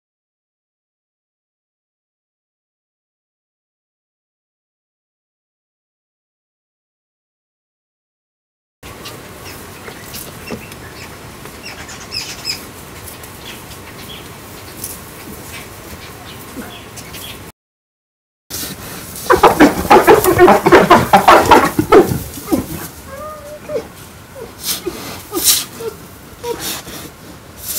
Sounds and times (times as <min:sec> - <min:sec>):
Chirp, tweet: 0:16.0 - 0:17.4.